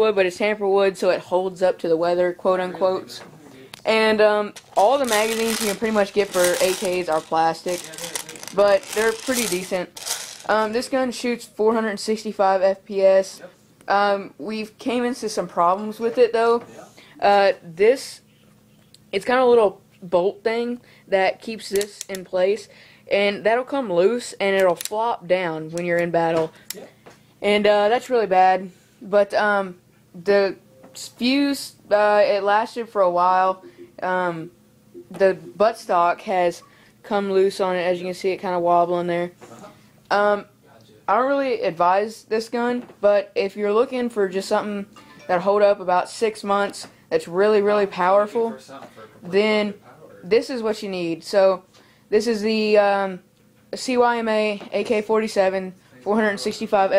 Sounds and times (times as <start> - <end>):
Speech: 0.0 - 9.9, 53.8 - 56.9.